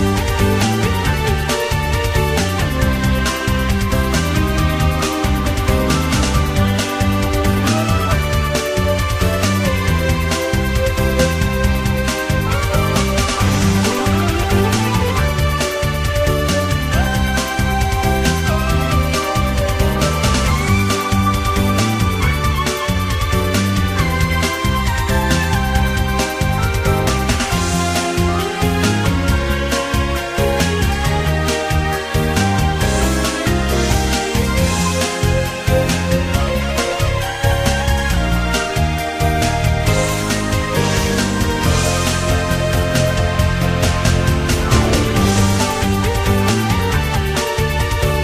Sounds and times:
Music: 0:00.0 - 0:48.2.

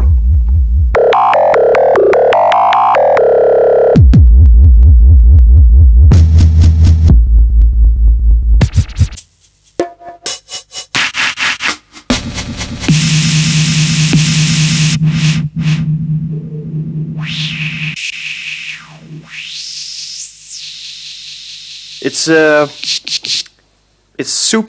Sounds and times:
Sampler: 0:00.9 - 0:05.5, 0:12.9 - 0:23.5.

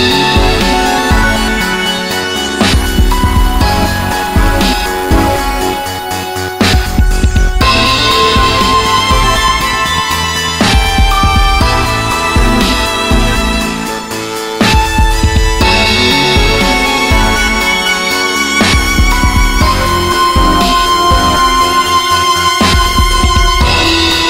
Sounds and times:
Music: 0:00.0 - 0:24.3.

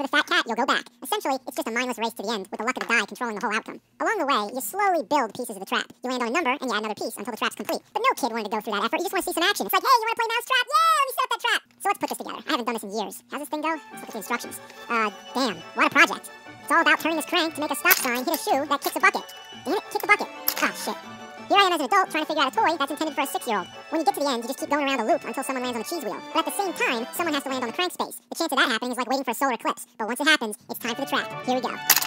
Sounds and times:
Speech: 0:00.0 - 0:31.9
Music: 0:13.4 - 0:28.0, 0:30.7 - 0:32.0.

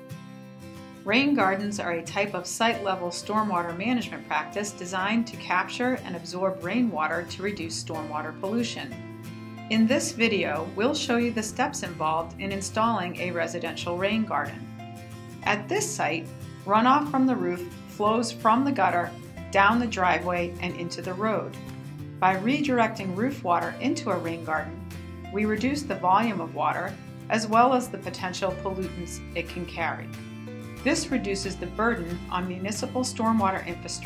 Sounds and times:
Music: 0:00.0 - 0:34.0
Speech: 0:01.1 - 0:08.9, 0:09.7 - 0:14.6, 0:15.4 - 0:21.5, 0:22.2 - 0:24.8, 0:25.4 - 0:30.1, 0:30.8 - 0:34.0.

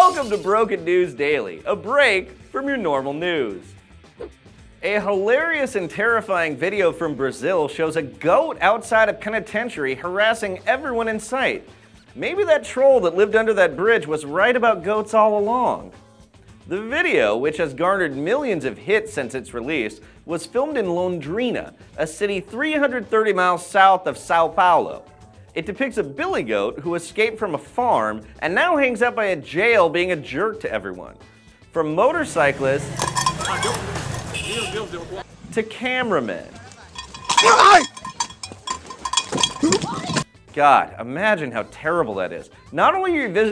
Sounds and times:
Speech: 0:00.0 - 0:03.6, 0:04.8 - 0:11.6, 0:12.2 - 0:15.9, 0:16.7 - 0:25.0, 0:25.6 - 0:31.1, 0:31.8 - 0:32.8, 0:34.5 - 0:37.9, 0:39.6 - 0:43.5
Music: 0:00.0 - 0:43.5.

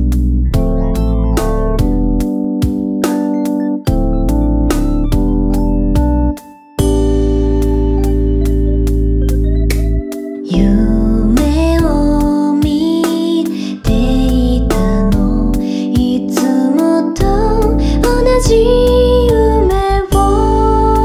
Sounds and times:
Music: 0:00.0 - 0:21.0.

